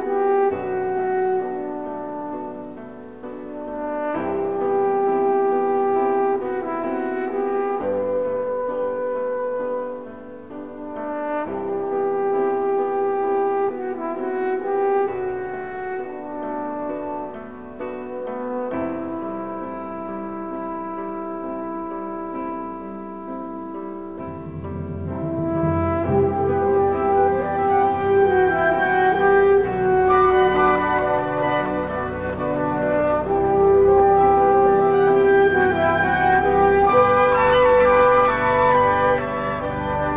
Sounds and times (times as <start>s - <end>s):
Music: 0.0s - 40.1s.